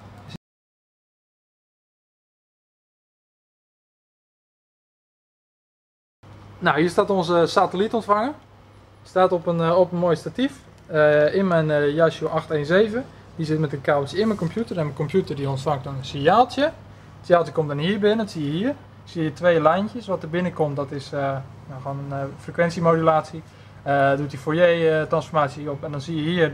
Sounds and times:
Speech: 6.6s - 8.4s, 9.1s - 26.5s.

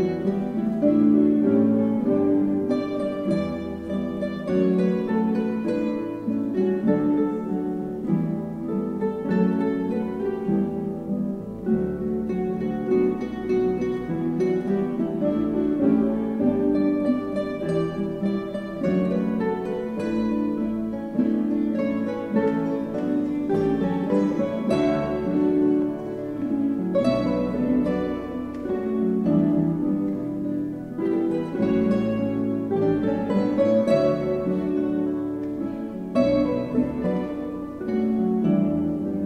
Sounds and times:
Guitar: 0.0s - 39.2s
Orchestra: 0.0s - 39.2s.

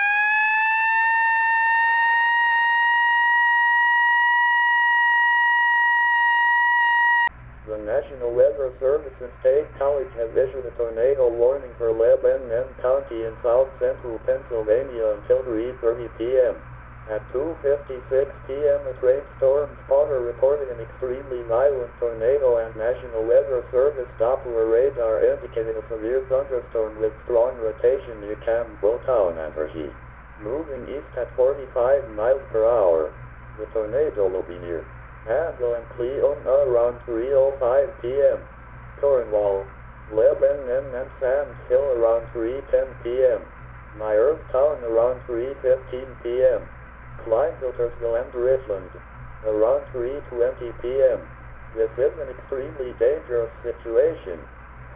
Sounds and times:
Radio: 7.7s - 54.5s
Speech: 7.7s - 54.5s.

